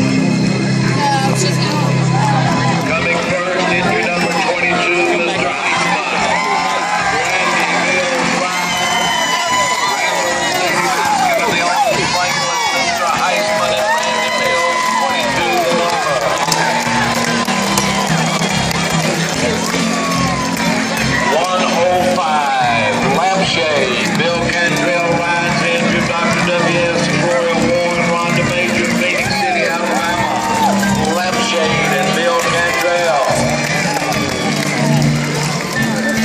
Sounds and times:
Music: 0.0 - 36.2
Speech: 2.9 - 6.4, 21.3 - 30.2, 31.1 - 33.4.

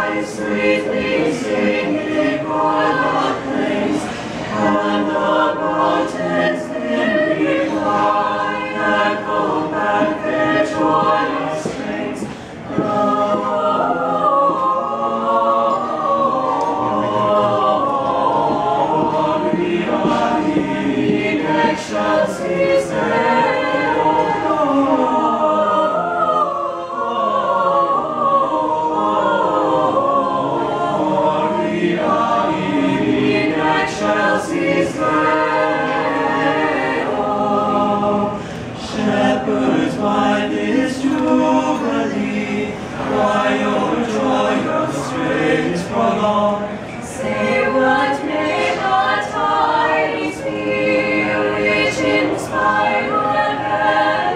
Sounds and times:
A capella: 0.0 - 54.3.

